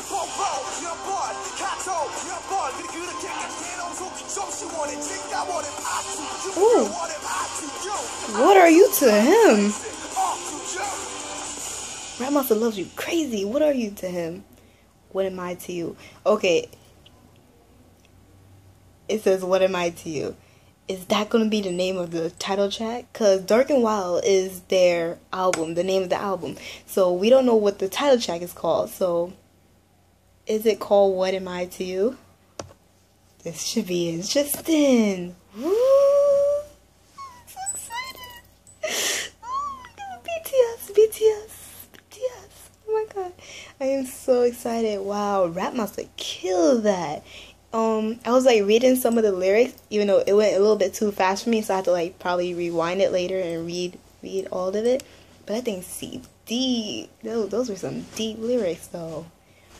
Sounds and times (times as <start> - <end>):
Inside, small room: 0.0 - 59.7
Speech: 8.3 - 9.8, 15.1 - 16.7, 19.1 - 29.4, 30.5 - 32.2, 39.9 - 47.2, 47.8 - 59.3.